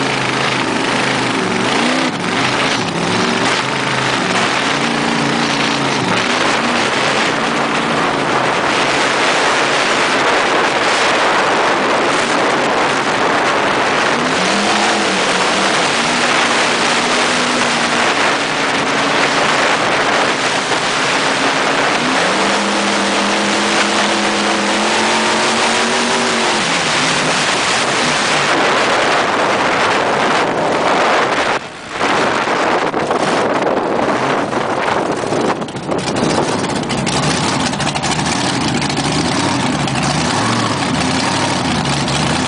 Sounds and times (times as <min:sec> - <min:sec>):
Motorboat, speedboat: 0:00.0 - 0:42.4
Waves, surf: 0:00.0 - 0:42.4.